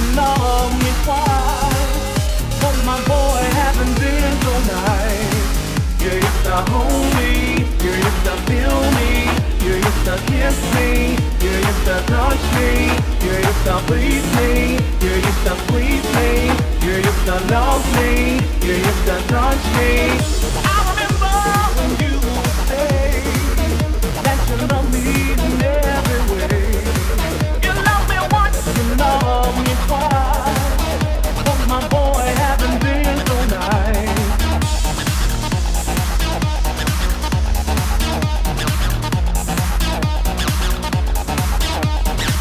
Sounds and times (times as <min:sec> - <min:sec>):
Soundtrack music: 0:00.0 - 0:42.4.